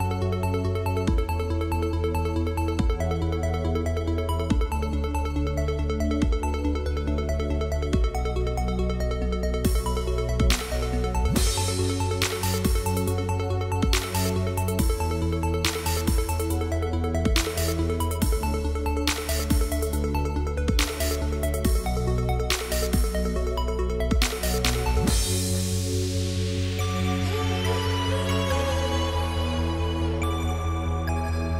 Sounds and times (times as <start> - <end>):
Music: 0.0 - 31.5.